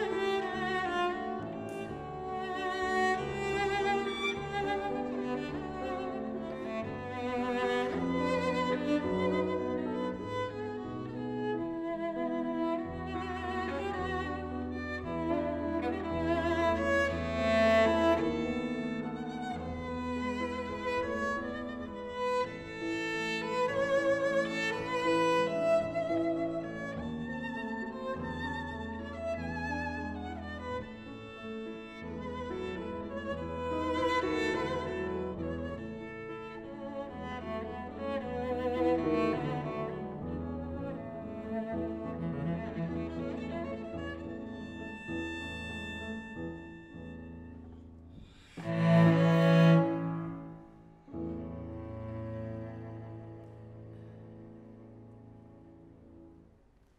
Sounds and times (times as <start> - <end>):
Cello: 0.0 - 56.9
Double bass: 48.6 - 53.9.